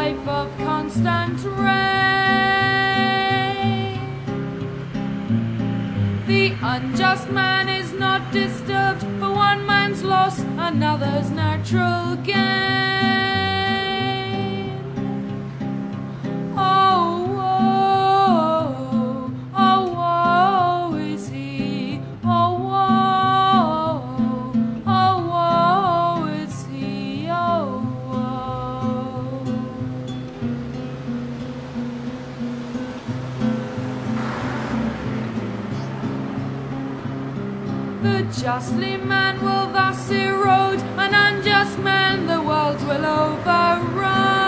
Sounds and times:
Music: 0.0 - 44.4.

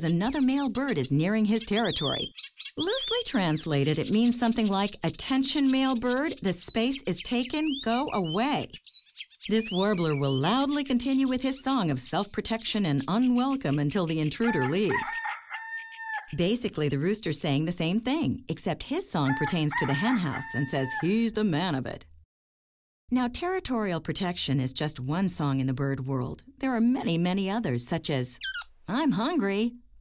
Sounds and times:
Speech: 0.0 - 8.8, 9.5 - 15.2, 16.4 - 22.1, 23.1 - 29.8
Chirp, tweet: 0.0 - 15.0.

